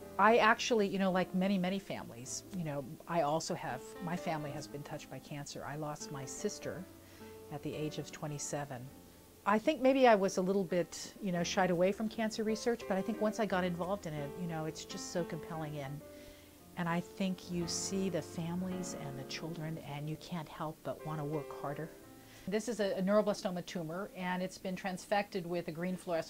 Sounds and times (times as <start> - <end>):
Music: 0.0 - 26.3
Speech: 0.2 - 6.9, 7.5 - 8.9, 9.5 - 16.0, 16.8 - 26.3.